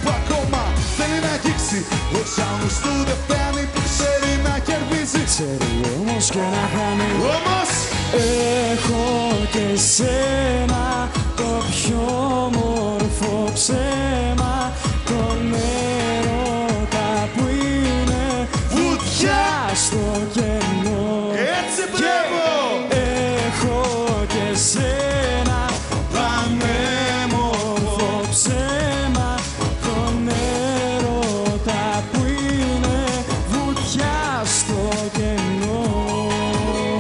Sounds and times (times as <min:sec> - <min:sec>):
Music: 0:00.0 - 0:37.0
Singing: 0:00.1 - 0:37.0.